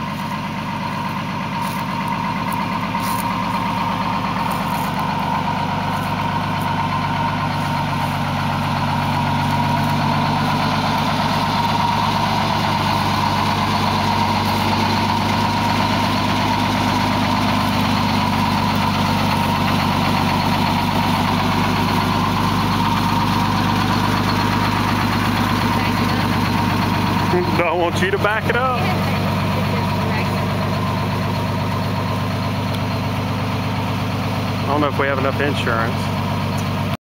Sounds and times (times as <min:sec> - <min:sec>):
Truck: 0:00.0 - 0:37.0
Speech: 0:27.3 - 0:30.4, 0:34.7 - 0:36.1.